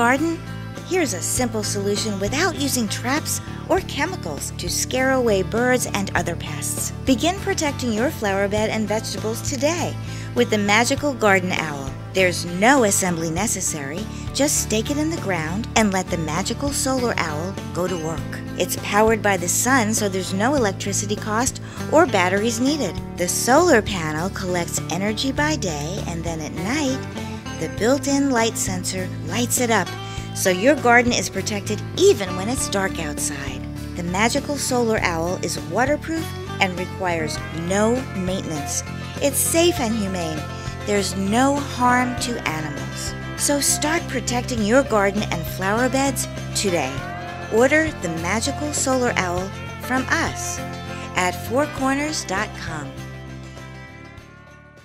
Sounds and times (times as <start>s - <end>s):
Speech: 0.0s - 53.0s
Music: 0.0s - 54.8s.